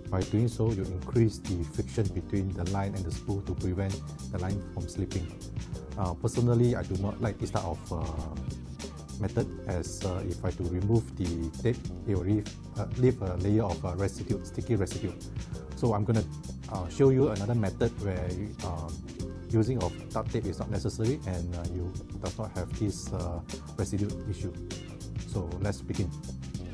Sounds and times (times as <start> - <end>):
Speech: 0.0 - 5.4, 6.0 - 8.5, 9.2 - 15.2, 15.8 - 24.6, 25.3 - 26.2
Music: 0.0 - 26.7.